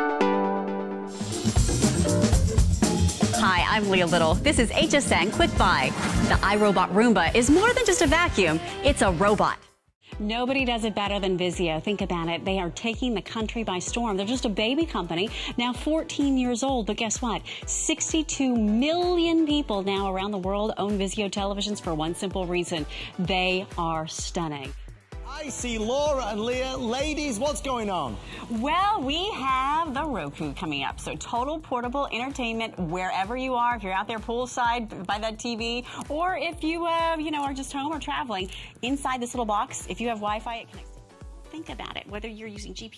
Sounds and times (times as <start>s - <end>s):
Music: 0.0s - 42.9s
Speech: 25.3s - 40.7s, 41.6s - 42.9s.